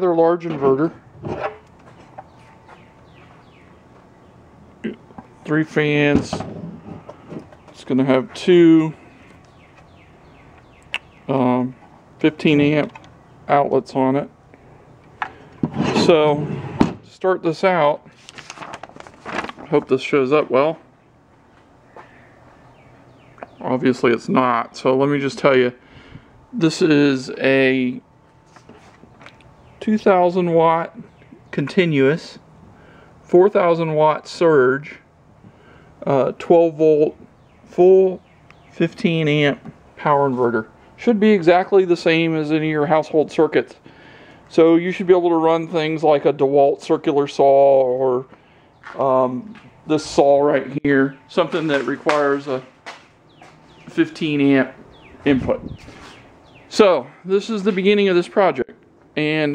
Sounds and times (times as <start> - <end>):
Speech: 0.0 - 1.0, 4.8 - 6.5, 7.8 - 9.0, 11.3 - 14.3, 15.9 - 16.5, 17.1 - 18.1, 19.7 - 20.9, 23.5 - 25.8, 26.6 - 28.0, 29.8 - 32.4, 33.3 - 35.1, 36.0 - 38.2, 38.8 - 43.8, 44.5 - 48.3, 48.9 - 52.7, 53.9 - 55.7, 56.7 - 59.5.